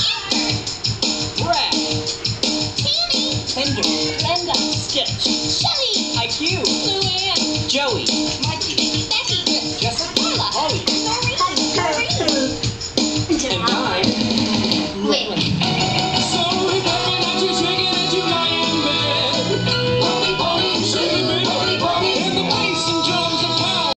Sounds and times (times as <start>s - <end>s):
Music: 0.0s - 23.9s
Speech: 13.3s - 14.2s, 15.0s - 15.5s.